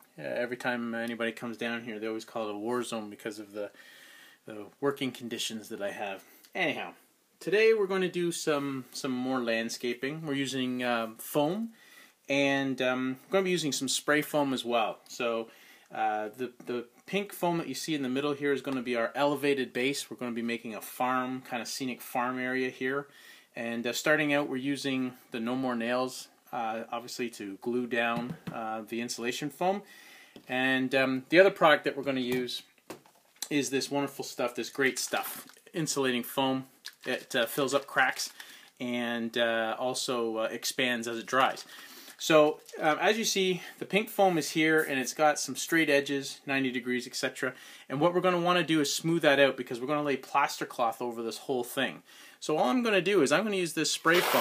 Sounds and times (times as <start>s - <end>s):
Speech: 0.2s - 3.8s, 4.5s - 29.9s, 30.5s - 32.7s, 33.4s - 54.4s.